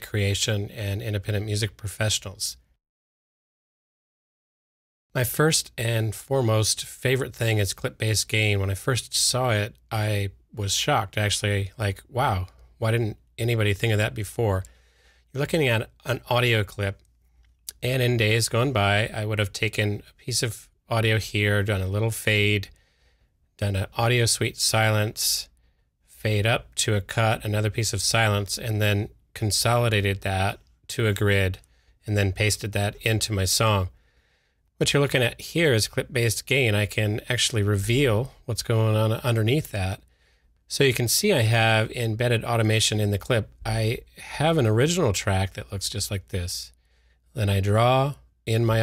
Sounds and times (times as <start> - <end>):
Speech: 0.0 - 2.7, 5.1 - 14.7, 15.3 - 17.0, 17.7 - 22.7, 23.6 - 34.0, 34.8 - 40.1, 40.7 - 48.8.